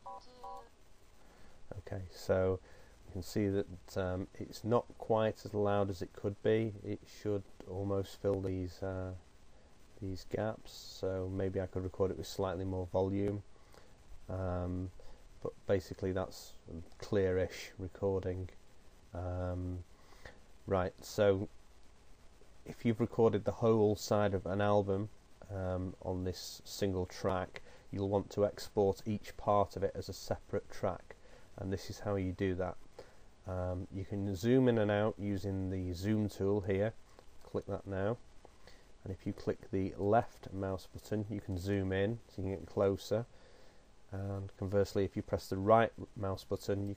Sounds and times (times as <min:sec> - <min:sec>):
Speech: 0:01.7 - 0:09.2, 0:10.0 - 0:13.5, 0:14.3 - 0:19.9, 0:20.6 - 0:21.6, 0:22.7 - 0:32.8, 0:33.4 - 0:38.2, 0:39.0 - 0:43.3, 0:44.1 - 0:46.9.